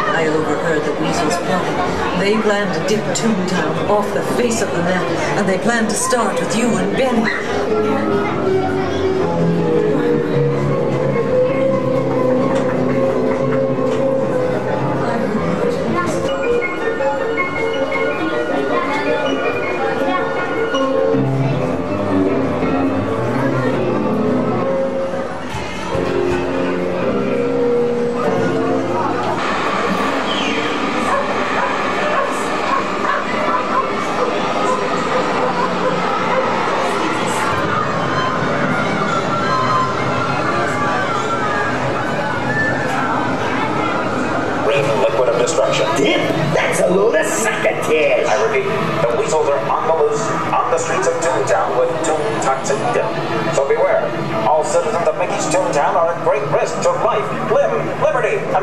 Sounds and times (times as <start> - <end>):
Music: 0.0 - 58.6.